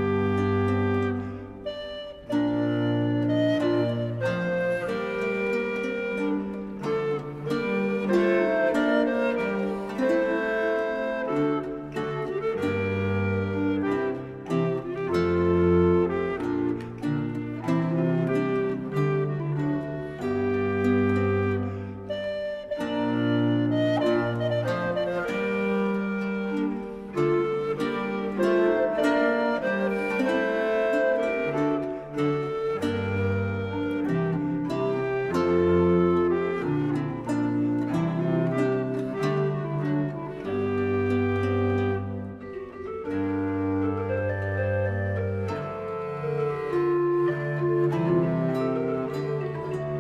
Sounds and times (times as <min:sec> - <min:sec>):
Music: 0:00.0 - 0:50.0.